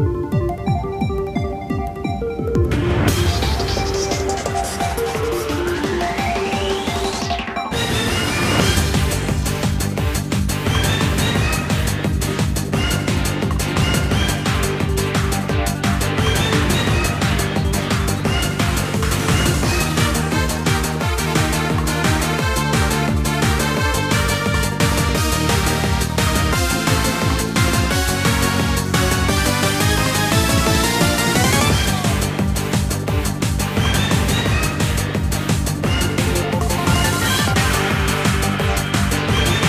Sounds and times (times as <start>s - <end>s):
Music: 0.0s - 39.6s.